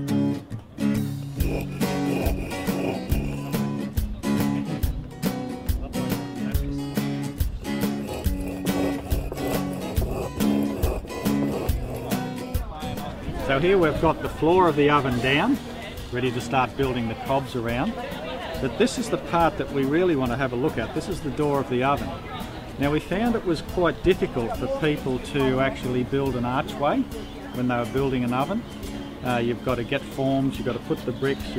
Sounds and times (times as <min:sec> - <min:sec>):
Music: 0:00.0 - 0:31.5
Speech: 0:12.7 - 0:28.6, 0:29.2 - 0:31.5.